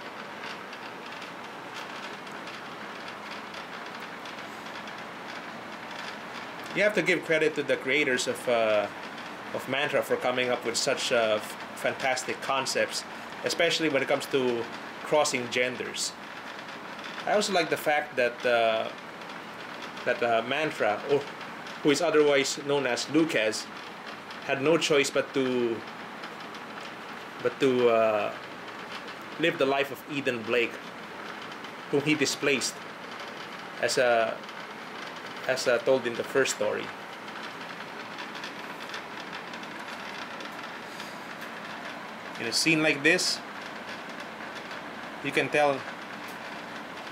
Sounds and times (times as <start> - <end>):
Speech: 6.7 - 8.9, 9.5 - 16.2, 17.2 - 19.0, 20.1 - 23.7, 24.5 - 25.8, 27.4 - 28.4, 29.4 - 30.8, 31.9 - 32.8, 33.8 - 34.4, 35.4 - 36.9, 42.4 - 43.4, 45.2 - 45.9.